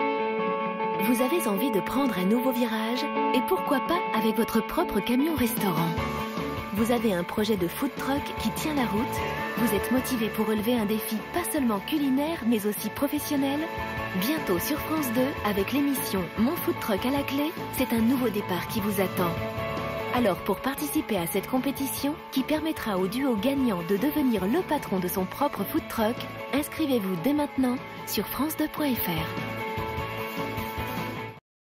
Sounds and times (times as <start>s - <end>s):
Music: 0.0s - 31.4s
Speech: 1.0s - 6.0s, 6.7s - 19.4s, 20.1s - 29.4s.